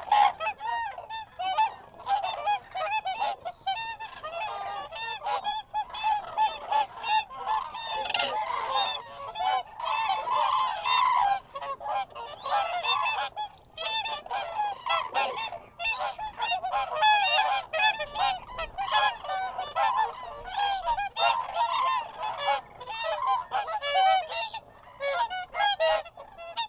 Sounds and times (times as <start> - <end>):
Honk: 0.0 - 26.6.